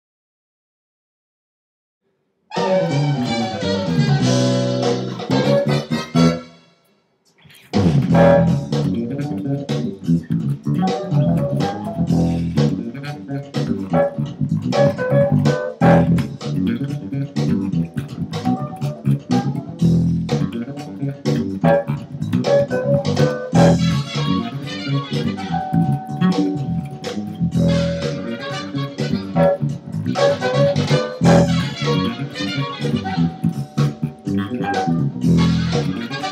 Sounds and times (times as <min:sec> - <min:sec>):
Bass guitar: 0:02.5 - 0:06.5, 0:07.5 - 0:36.3.